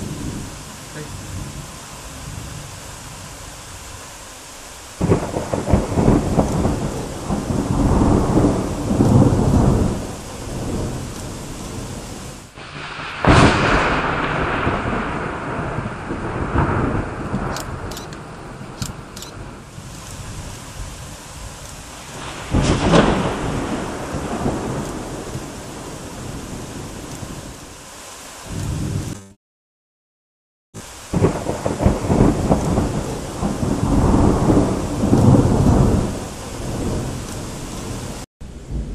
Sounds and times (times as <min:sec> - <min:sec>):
Thunder: 0:05.0 - 0:21.0, 0:22.0 - 0:27.6, 0:31.1 - 0:38.9.